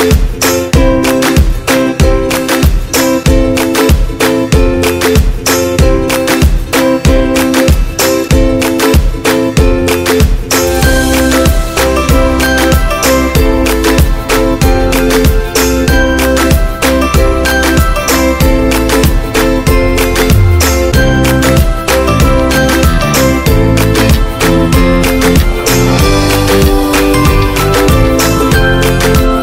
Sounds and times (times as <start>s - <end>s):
Music: 0.0s - 29.4s.